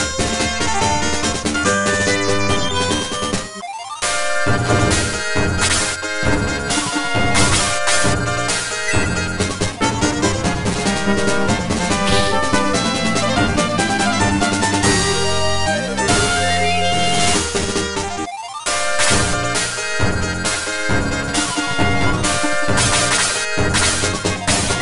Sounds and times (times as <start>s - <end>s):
Music: 0.0s - 24.8s.